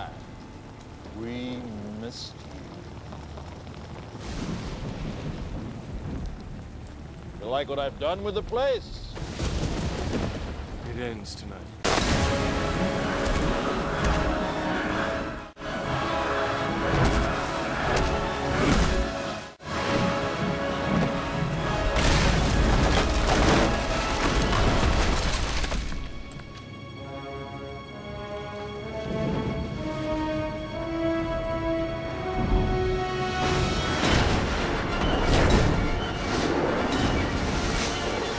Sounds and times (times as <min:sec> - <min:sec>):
Speech: 0:10.8 - 0:11.7
Music: 0:12.1 - 0:38.3.